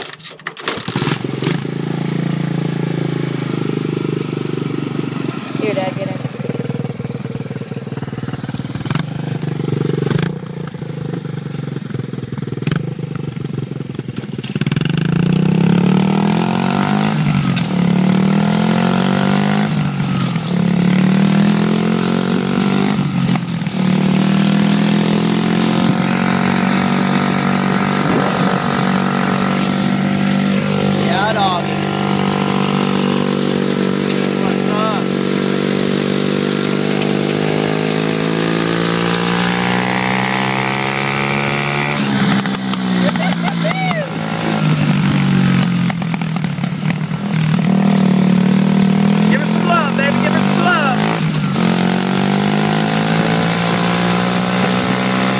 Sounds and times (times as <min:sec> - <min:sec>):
Speech: 0:05.6 - 0:06.3, 0:31.0 - 0:31.8, 0:34.4 - 0:35.1, 0:49.2 - 0:51.0.